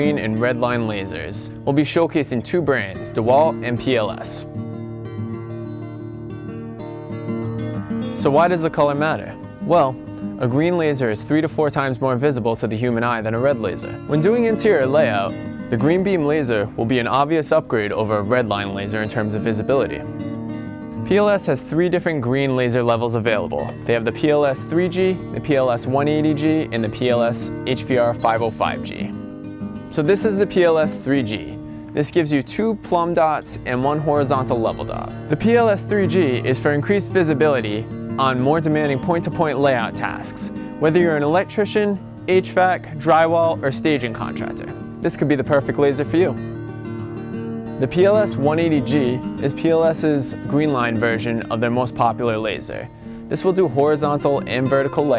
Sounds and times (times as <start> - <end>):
Speech: 0.0 - 4.4, 8.2 - 20.0, 21.1 - 29.1, 30.0 - 46.4, 47.8 - 55.1
Music: 0.0 - 55.1.